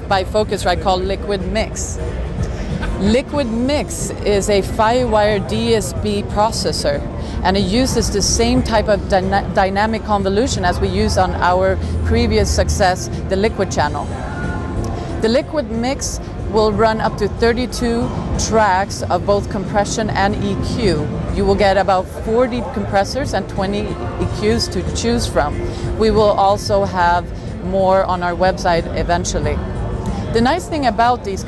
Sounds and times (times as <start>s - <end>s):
Speech: 0.0s - 2.0s, 2.8s - 14.0s, 15.2s - 29.6s, 30.3s - 31.4s
Music: 0.0s - 31.4s.